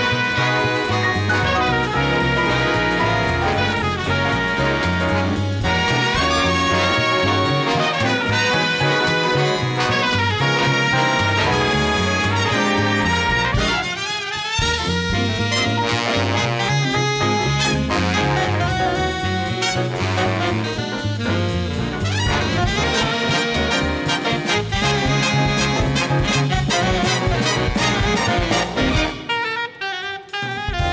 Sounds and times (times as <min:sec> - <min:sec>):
Jazz: 0:00.0 - 0:30.9
Orchestra: 0:00.0 - 0:30.9.